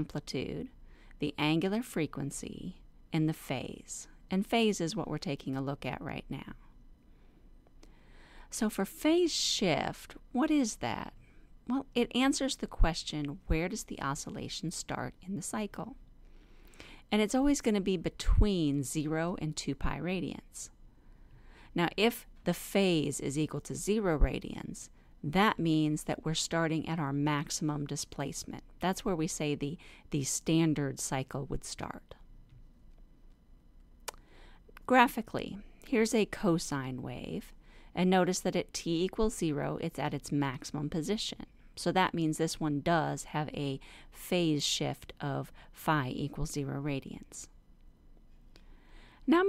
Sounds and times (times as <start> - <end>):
Speech: 0.0 - 6.6, 8.5 - 16.0, 17.1 - 20.7, 21.8 - 32.2, 34.8 - 47.5, 49.3 - 49.4.